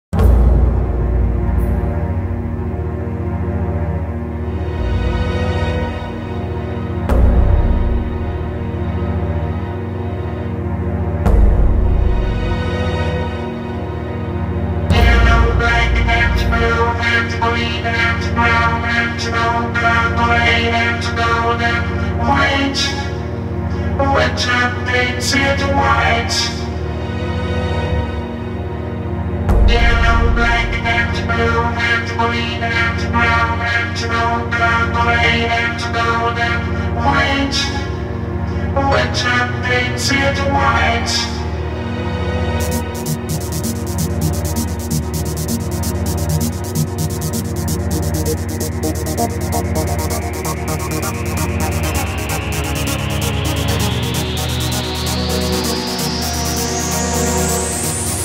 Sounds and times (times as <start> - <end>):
Scary music: 0.2 - 24.2, 41.3 - 58.2.